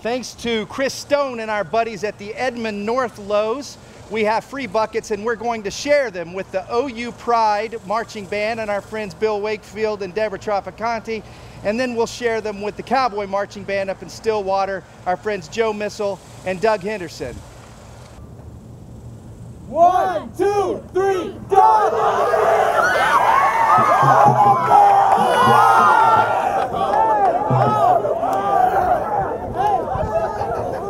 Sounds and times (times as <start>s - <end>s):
Speech: 0.0s - 17.4s
Crowd: 21.5s - 30.8s.